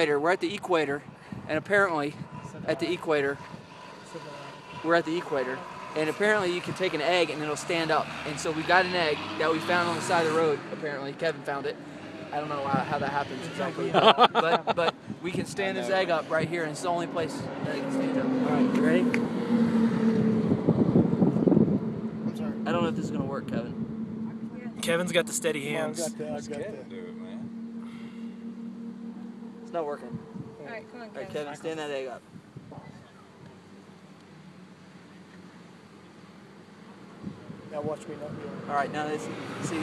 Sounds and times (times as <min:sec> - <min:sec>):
Speech: 0:00.0 - 0:03.4, 0:04.1 - 0:11.8, 0:12.4 - 0:19.1, 0:22.3 - 0:23.7, 0:24.4 - 0:27.4
Outside, urban or manmade: 0:00.0 - 0:39.8.